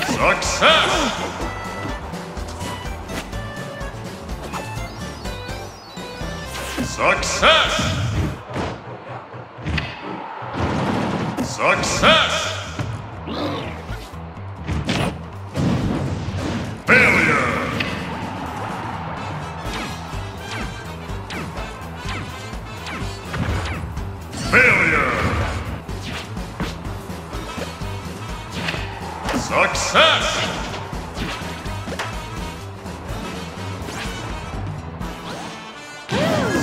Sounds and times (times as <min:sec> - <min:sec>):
Music: 0:00.0 - 0:08.5, 0:11.6 - 0:36.6
Speech: 0:06.8 - 0:08.0, 0:11.4 - 0:12.7, 0:16.9 - 0:17.8, 0:24.4 - 0:25.5, 0:29.3 - 0:30.6.